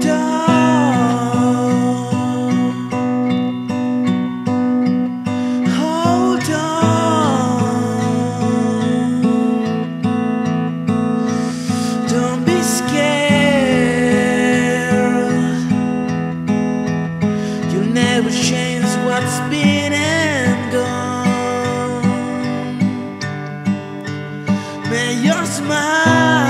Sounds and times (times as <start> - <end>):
Music: 0.0 - 26.4.